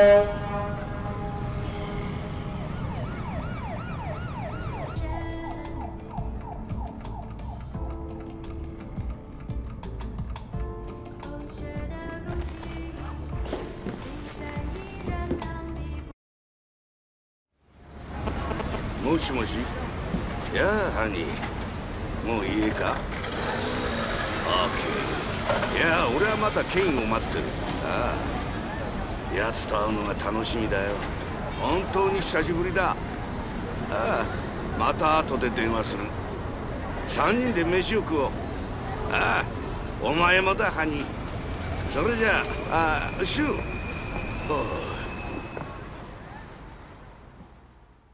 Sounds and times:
Music: 3.6 - 16.2.

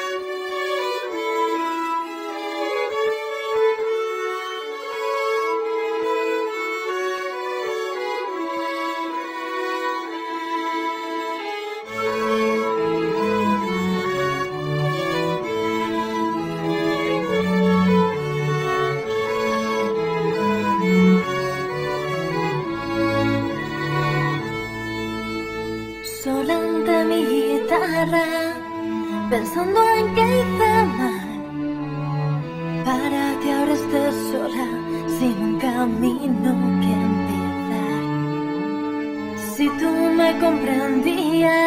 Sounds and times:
Sad music: 0.0 - 41.6.

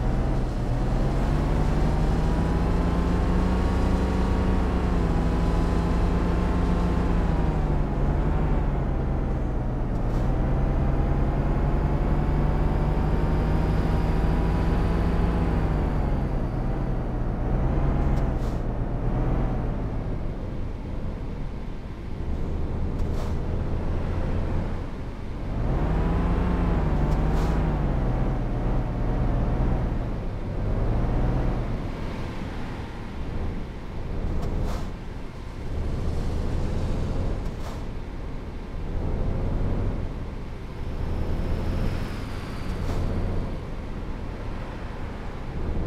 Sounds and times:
Truck: 0.0 - 45.8.

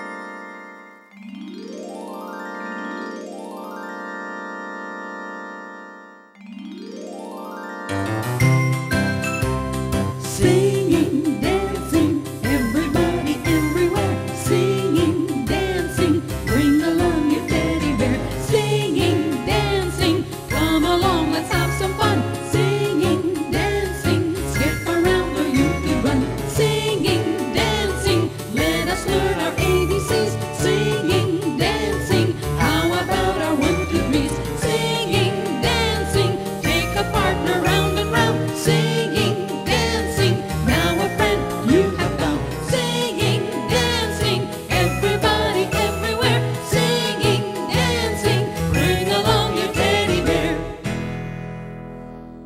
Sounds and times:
Music: 0.0 - 52.4
Female singing: 10.4 - 50.6.

